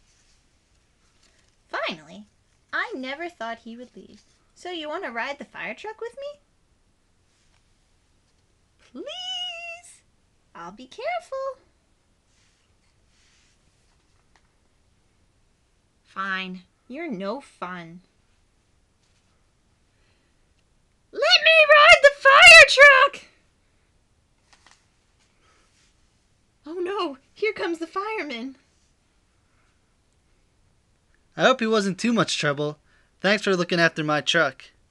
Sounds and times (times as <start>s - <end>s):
Speech: 1.7s - 6.4s, 8.9s - 10.0s, 10.6s - 11.7s, 16.1s - 18.1s, 21.2s - 23.4s, 26.7s - 28.6s, 31.4s - 34.8s.